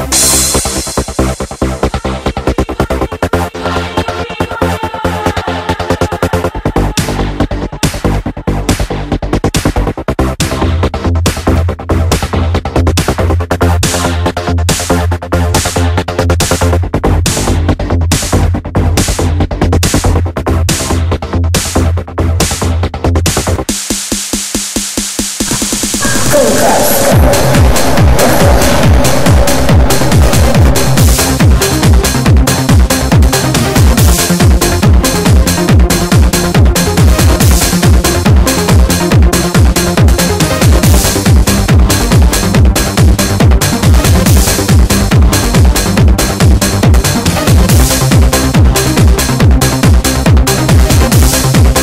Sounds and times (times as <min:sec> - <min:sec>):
Trance music: 0:00.0 - 0:12.7, 0:25.4 - 0:51.8
Techno: 0:00.0 - 0:23.9, 0:25.2 - 0:51.8.